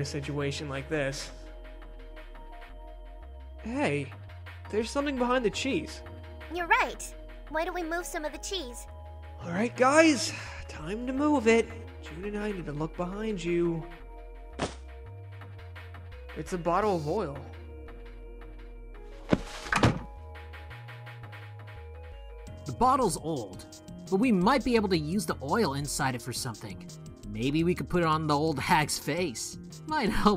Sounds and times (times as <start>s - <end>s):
Music: 0.0s - 30.3s
Speech: 16.4s - 17.5s, 22.7s - 30.3s.